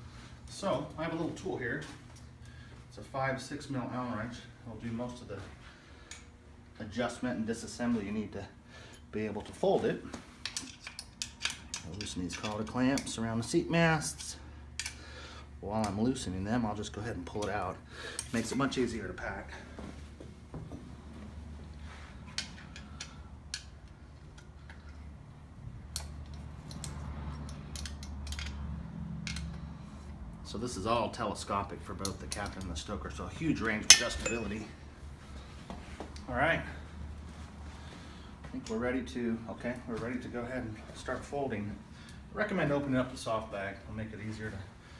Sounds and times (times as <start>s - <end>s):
Speech: 0.5s - 2.0s, 2.9s - 5.5s, 6.8s - 10.1s, 11.8s - 14.4s, 15.6s - 19.7s, 30.5s - 34.8s, 36.3s - 36.8s, 38.5s - 44.7s.